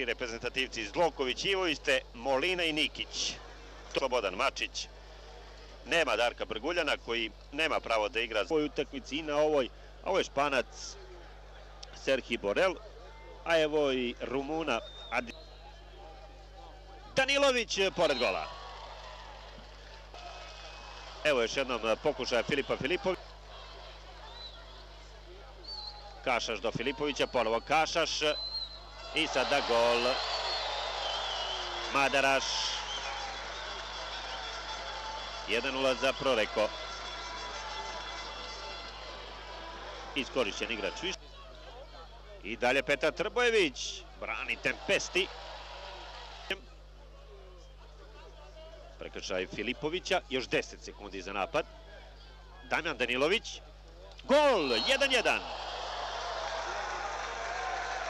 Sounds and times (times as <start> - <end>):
Speech: 0.0 - 4.9, 5.9 - 11.2, 11.9 - 15.4, 16.0 - 18.5, 21.2 - 23.2, 26.2 - 28.4, 29.2 - 30.2, 31.9 - 32.8, 35.5 - 36.7, 40.2 - 41.2, 41.9 - 45.3, 46.5 - 51.7, 52.7 - 55.4.